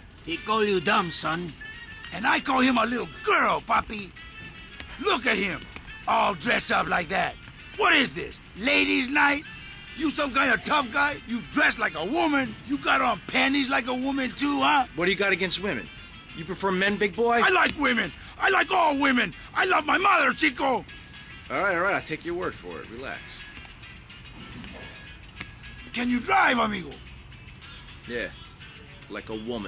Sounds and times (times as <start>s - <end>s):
Music: 0.0s - 29.6s
Speech: 0.3s - 1.5s, 2.1s - 4.1s, 5.0s - 9.4s, 10.0s - 20.8s, 21.5s - 23.4s, 26.0s - 27.0s.